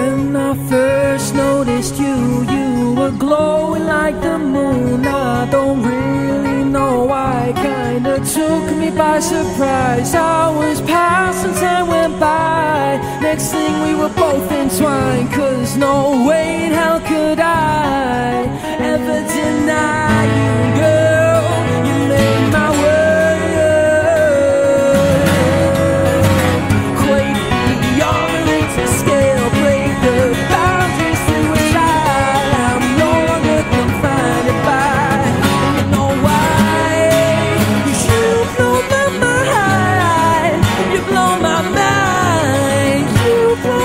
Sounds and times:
Music: 0.0s - 43.8s.

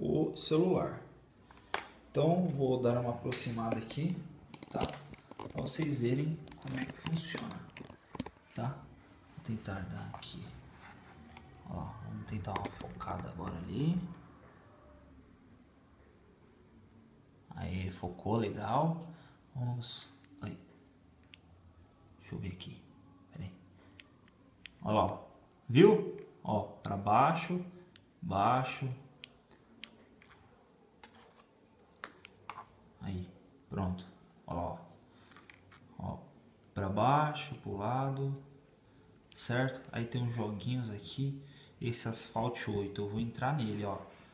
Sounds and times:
Speech: 0.0s - 1.2s, 2.1s - 7.8s, 8.6s - 10.6s, 11.6s - 14.2s, 17.5s - 20.7s, 22.2s - 23.6s, 24.8s - 29.1s, 33.0s - 35.0s, 36.0s - 38.5s, 39.4s - 44.1s
Inside, small room: 0.0s - 44.3s.

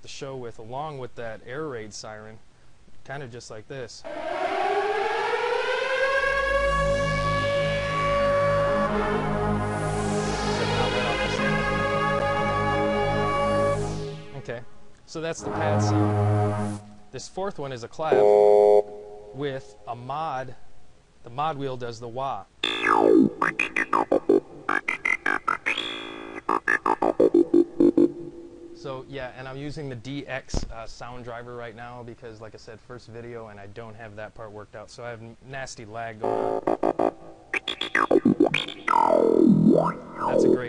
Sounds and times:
Speech: 0.0s - 2.4s, 3.0s - 4.1s, 14.4s - 16.1s, 17.2s - 18.2s, 19.4s - 20.6s, 21.2s - 22.5s, 28.8s - 36.3s, 40.2s - 40.6s
Sampler: 6.8s - 14.4s, 22.6s - 28.9s, 36.2s - 40.6s.

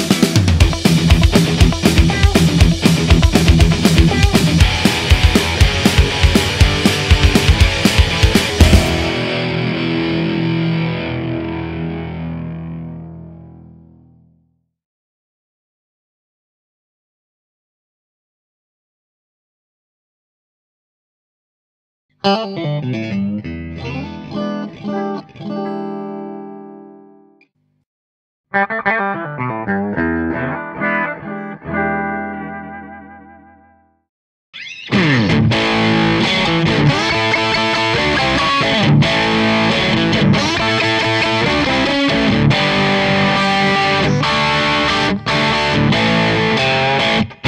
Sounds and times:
Distortion: 0.0s - 14.4s, 22.2s - 27.8s, 28.6s - 34.0s, 34.6s - 47.4s
Music: 0.0s - 14.6s, 22.2s - 27.5s, 28.6s - 34.0s, 34.7s - 47.4s.

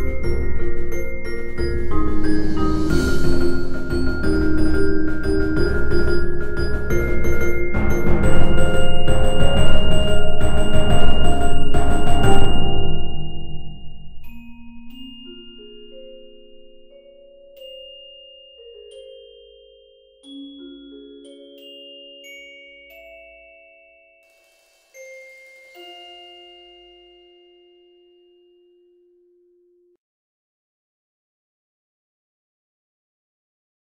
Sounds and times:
Wind chime: 0.0s - 29.1s.

